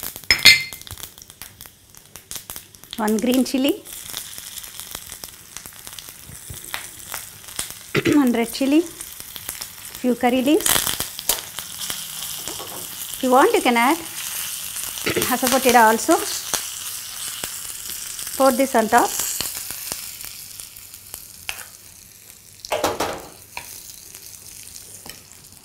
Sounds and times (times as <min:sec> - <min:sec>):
Speech: 0:03.0 - 0:03.9, 0:08.0 - 0:09.0, 0:10.0 - 0:10.7, 0:13.2 - 0:14.1, 0:15.1 - 0:16.4, 0:18.4 - 0:19.2.